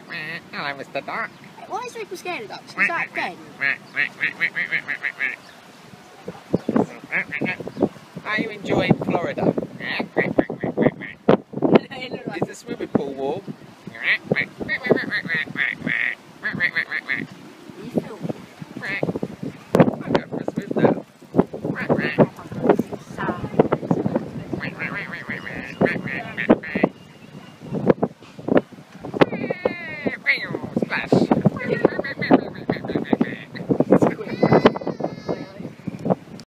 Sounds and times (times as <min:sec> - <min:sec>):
Quack: 0:03.6 - 0:05.4, 0:07.1 - 0:07.6, 0:14.0 - 0:17.3, 0:24.6 - 0:26.9.